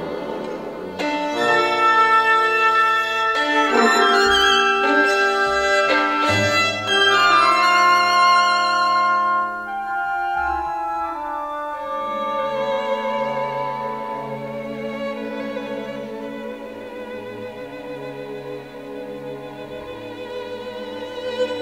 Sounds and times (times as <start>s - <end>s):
Violin, fiddle: 0.0s - 21.6s.